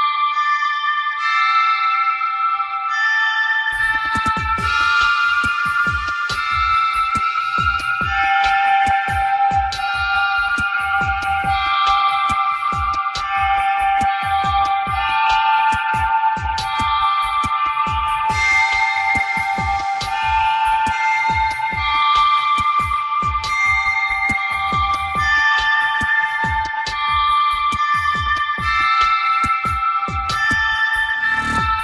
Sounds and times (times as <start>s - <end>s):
Music: 0.0s - 31.8s.